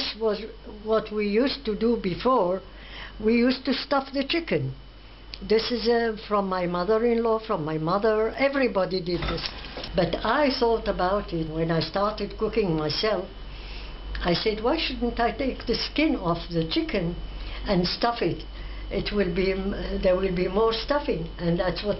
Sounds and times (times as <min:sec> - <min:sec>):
Speech: 0:00.0 - 0:04.8, 0:05.4 - 0:13.3, 0:14.2 - 0:21.9.